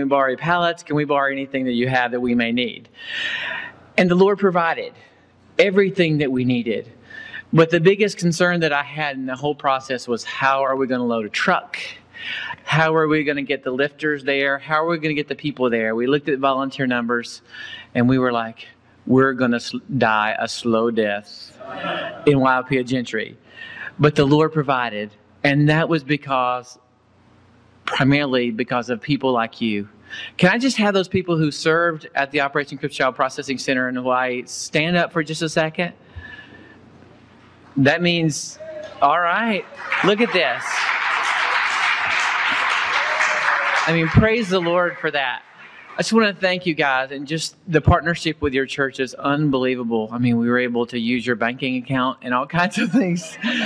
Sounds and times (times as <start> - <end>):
Speech: 0.0 - 2.9, 4.0 - 26.8, 27.9 - 36.0, 37.8 - 40.9, 43.8 - 53.6.